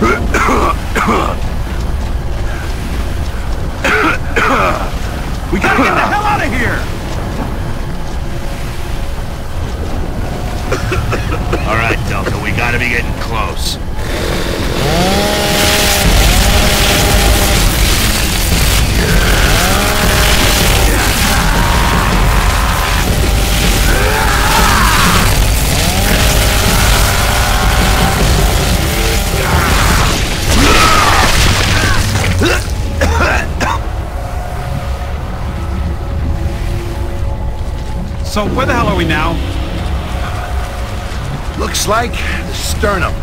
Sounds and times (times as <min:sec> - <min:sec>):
Speech: 0:11.6 - 0:13.8.